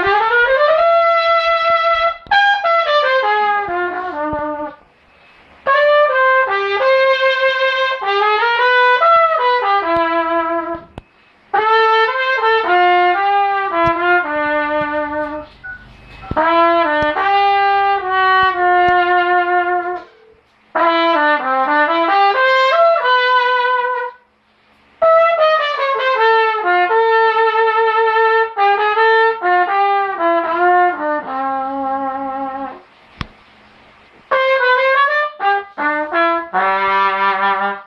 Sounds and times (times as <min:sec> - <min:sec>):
Trumpet: 0:00.0 - 0:24.4, 0:25.0 - 0:32.9, 0:34.3 - 0:37.8.